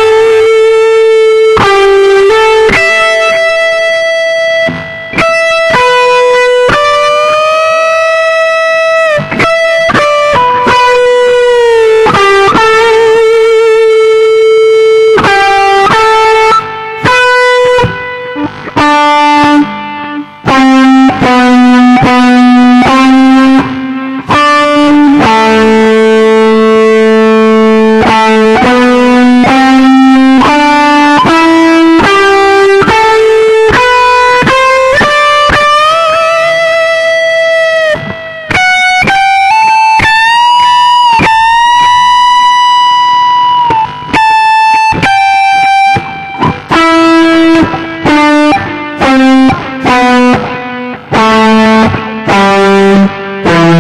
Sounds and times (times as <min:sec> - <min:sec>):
Guitar: 0:00.0 - 0:53.8
Inside, small room: 0:00.0 - 0:53.8.